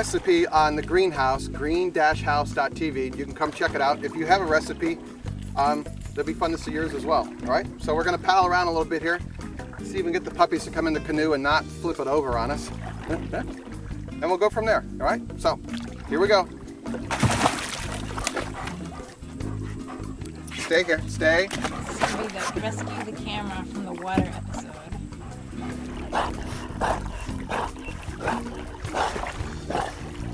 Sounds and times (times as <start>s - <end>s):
Music: 0.0s - 30.3s
Dog: 18.3s - 23.2s, 24.3s - 30.0s.